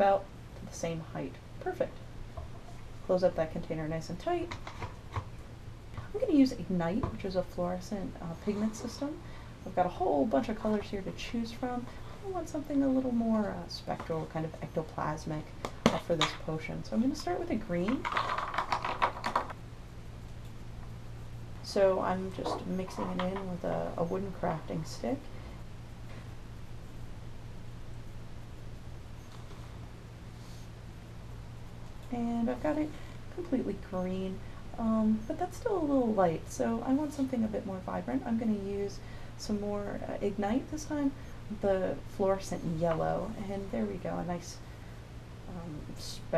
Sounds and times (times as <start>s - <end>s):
Speech: 0.0s - 2.0s, 3.1s - 4.6s, 6.0s - 18.0s, 21.6s - 25.3s, 32.1s - 44.6s, 45.5s - 46.3s
Inside, small room: 0.0s - 46.3s.